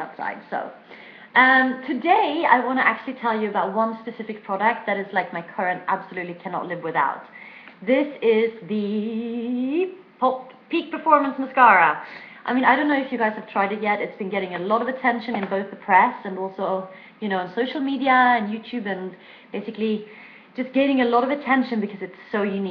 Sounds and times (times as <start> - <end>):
Speech: 0.0 - 22.7.